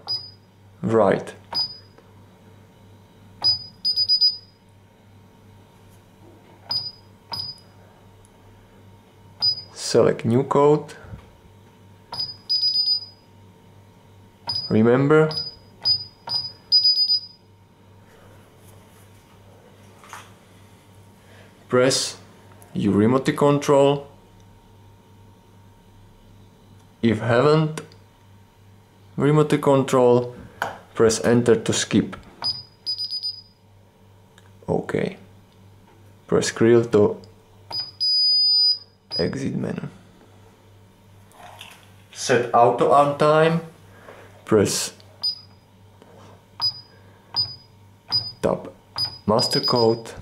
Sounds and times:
Speech: 0:00.8 - 0:01.4, 0:09.7 - 0:11.1, 0:14.7 - 0:15.3, 0:21.7 - 0:24.2, 0:27.0 - 0:27.9, 0:29.2 - 0:30.4, 0:31.0 - 0:32.2, 0:34.6 - 0:35.3, 0:36.3 - 0:37.2, 0:39.2 - 0:40.0, 0:42.1 - 0:43.7, 0:44.4 - 0:45.0, 0:48.4 - 0:50.2.

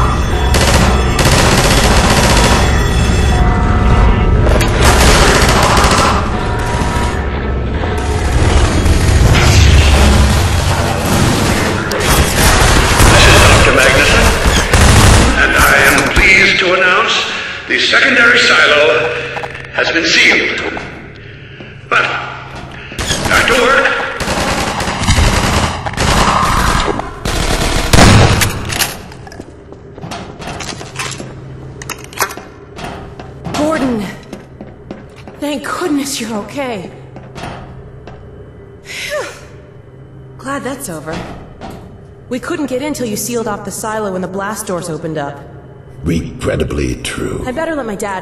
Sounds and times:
Machine gun: 0:00.6 - 0:02.7, 0:04.8 - 0:06.3, 0:10.3 - 0:16.0, 0:23.0 - 0:28.4.

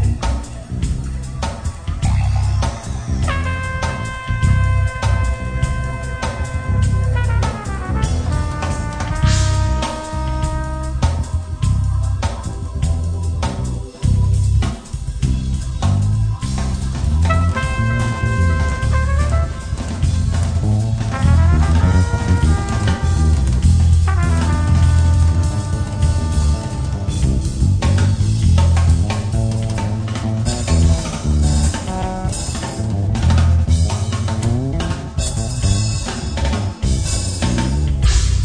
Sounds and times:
Background music: 0:00.0 - 0:38.4.

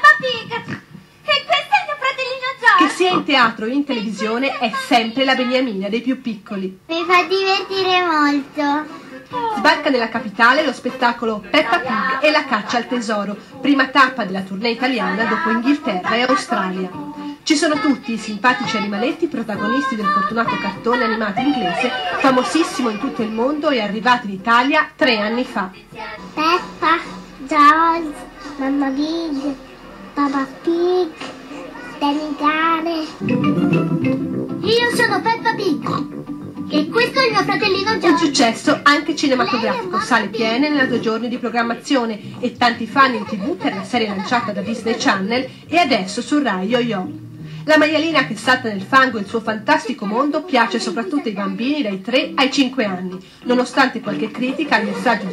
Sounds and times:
Music: 0:14.8 - 0:55.3.

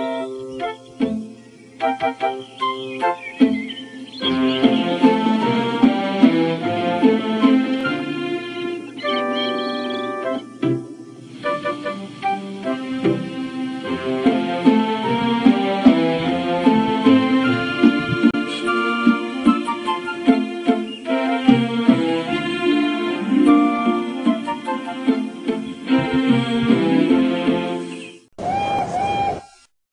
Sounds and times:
Music: 0:00.0 - 0:28.3.

